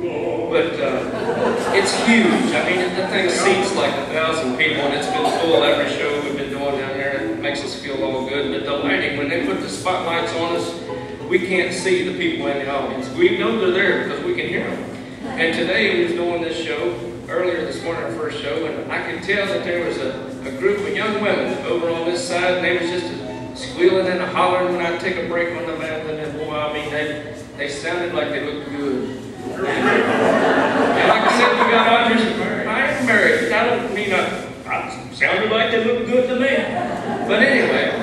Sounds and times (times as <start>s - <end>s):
Speech: 0.0s - 38.0s
Music: 5.4s - 26.4s.